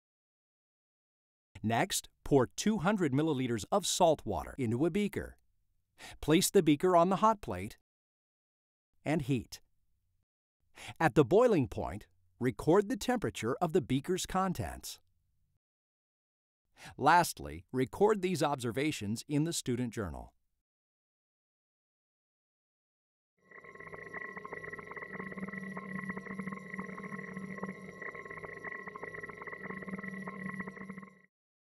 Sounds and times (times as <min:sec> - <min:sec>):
Speech: 0:01.6 - 0:05.4, 0:06.1 - 0:07.8, 0:09.1 - 0:09.6, 0:10.9 - 0:15.0, 0:16.9 - 0:20.4.